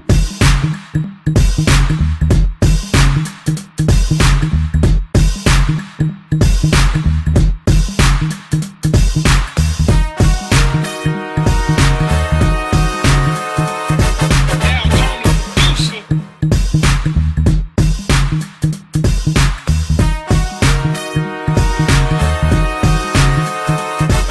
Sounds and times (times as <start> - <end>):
Music: 0.0 - 24.3.